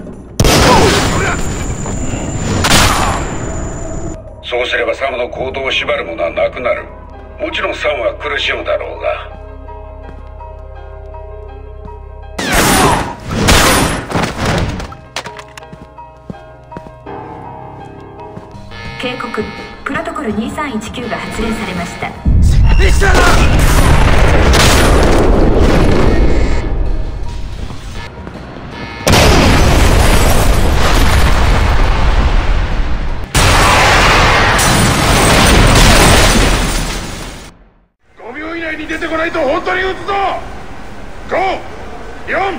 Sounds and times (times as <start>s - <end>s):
Music: 0.0s - 0.8s, 2.9s - 29.6s.